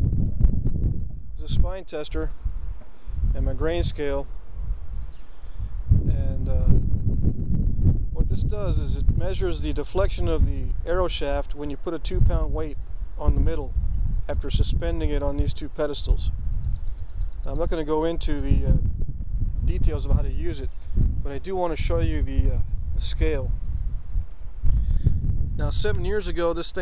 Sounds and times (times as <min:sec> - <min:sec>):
Speech: 0:01.4 - 0:02.4, 0:03.4 - 0:04.3, 0:06.1 - 0:06.8, 0:08.2 - 0:13.7, 0:14.3 - 0:16.4, 0:17.4 - 0:18.8, 0:19.7 - 0:23.5, 0:25.6 - 0:26.8.